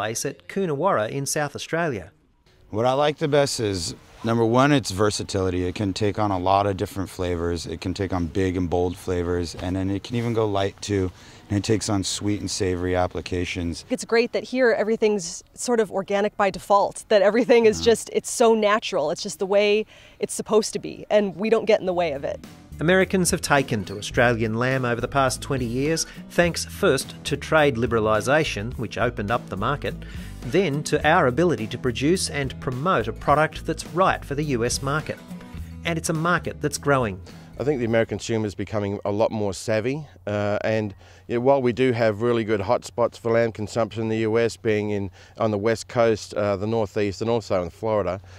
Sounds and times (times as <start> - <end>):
Music: 0.0 - 11.1, 21.5 - 38.6
Speech: 2.7 - 35.2, 35.9 - 48.2.